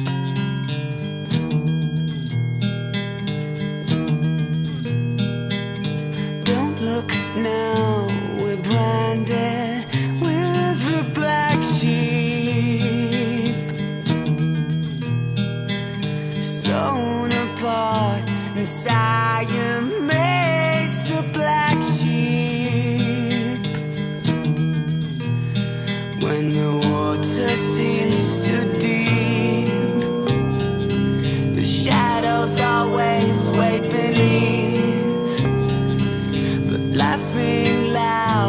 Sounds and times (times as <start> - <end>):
Music: 0.0 - 38.4.